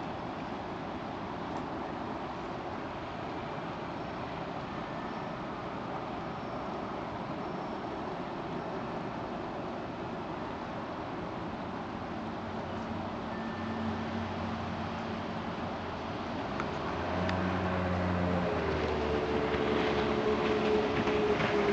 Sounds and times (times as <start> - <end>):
Sailboat, sailing ship: 0.0 - 21.7.